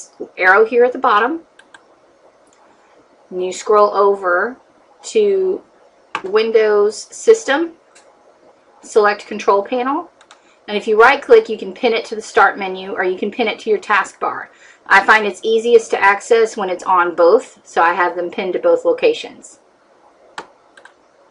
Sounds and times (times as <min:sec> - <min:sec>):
Speech: 0:00.0 - 0:01.5, 0:03.3 - 0:07.8, 0:08.9 - 0:10.1, 0:10.7 - 0:19.6.